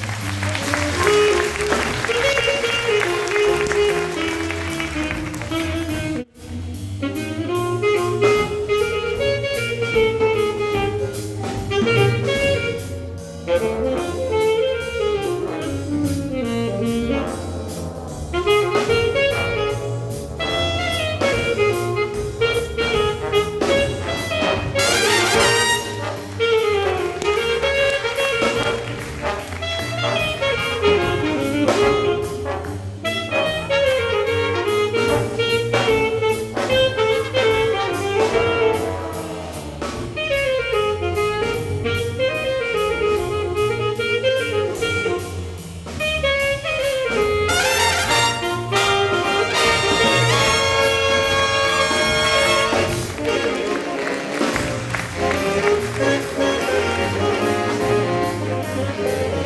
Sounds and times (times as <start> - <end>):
Jazz: 0.0 - 59.4.